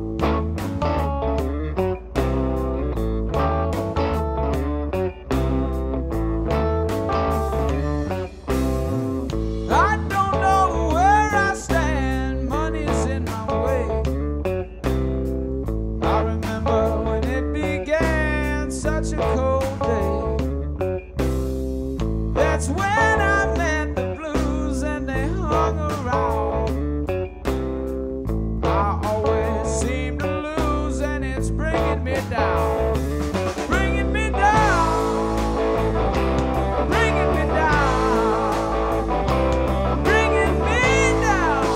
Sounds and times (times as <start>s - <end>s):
Music: 0.0s - 41.7s.